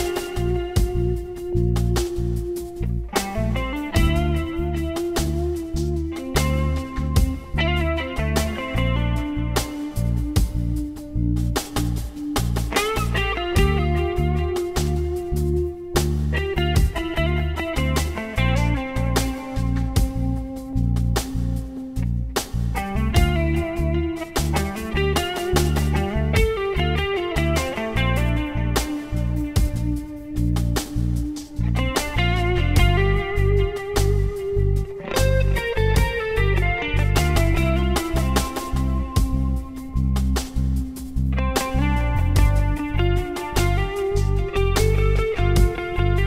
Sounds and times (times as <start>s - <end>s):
Music: 0.0s - 46.2s.